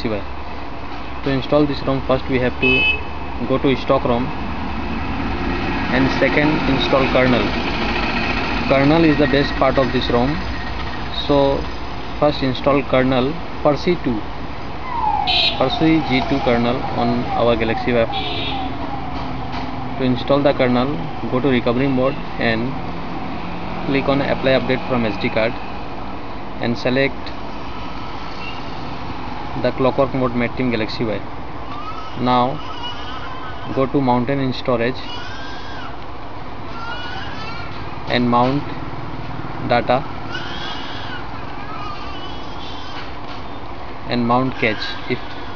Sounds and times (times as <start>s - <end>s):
Speech: 0.0s - 0.3s, 1.2s - 2.8s, 5.9s - 7.6s, 8.7s - 10.4s, 11.1s - 14.3s, 15.6s - 18.2s, 20.0s - 22.8s, 23.9s - 25.6s, 26.6s - 27.4s, 29.6s - 31.3s, 32.2s - 32.6s, 33.7s - 35.1s, 38.1s - 38.8s, 39.6s - 40.1s, 44.1s - 45.3s
Outside, urban or manmade: 0.0s - 45.5s.